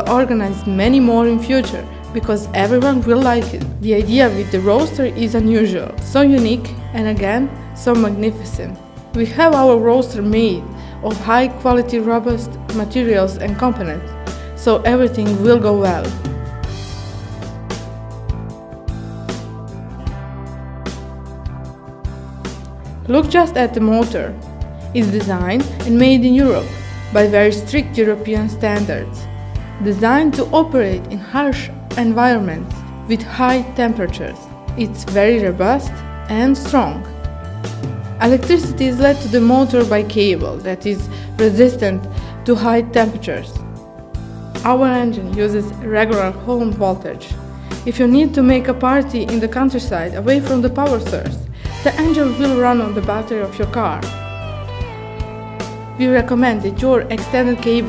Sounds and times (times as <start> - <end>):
Speech: 0.0 - 14.0, 14.6 - 16.2, 23.1 - 24.4, 25.0 - 29.2, 29.8 - 37.0, 38.2 - 43.6, 44.6 - 54.1, 56.0 - 57.8
Music: 0.0 - 57.8.